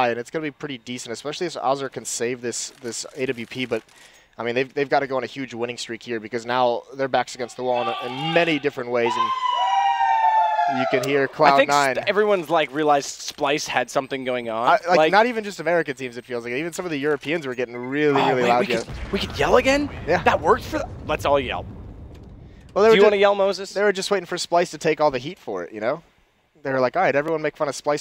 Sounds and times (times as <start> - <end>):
Speech: 0.0 - 3.8, 4.4 - 9.3, 10.7 - 21.6, 22.8 - 26.0, 26.6 - 28.0.